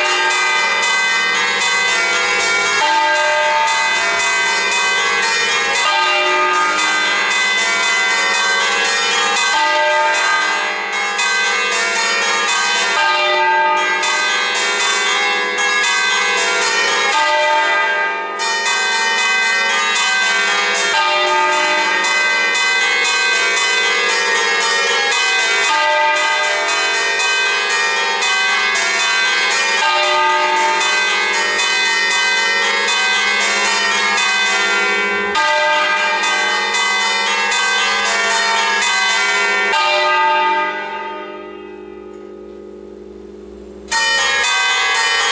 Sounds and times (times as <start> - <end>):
Bell: 0.0 - 45.3.